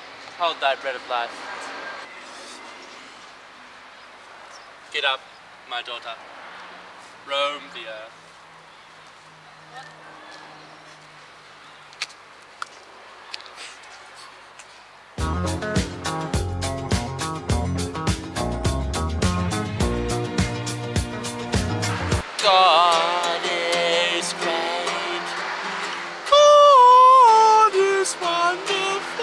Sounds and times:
Speech: 0:00.4 - 0:01.4, 0:07.3 - 0:08.1.

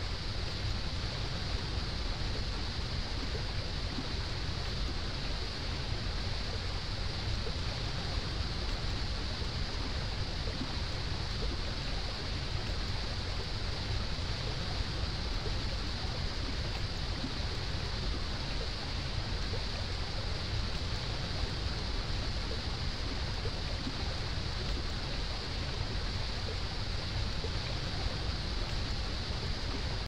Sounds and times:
Waterfall: 0:00.0 - 0:30.0.

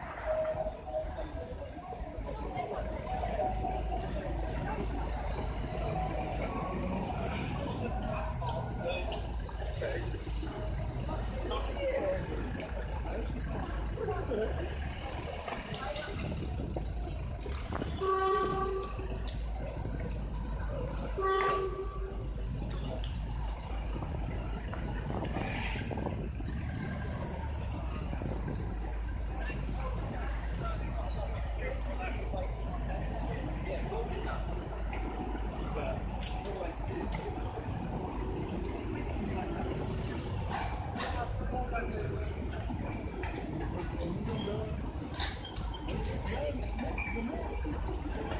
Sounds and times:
Traffic noise, roadway noise: 0:00.0 - 0:48.3.

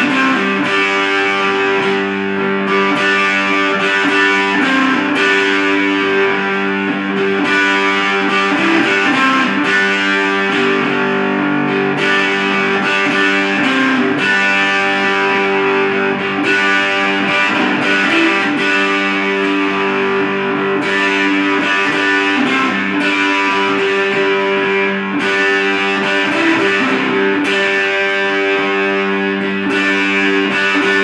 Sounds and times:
Strum: 0:00.0 - 0:31.0.

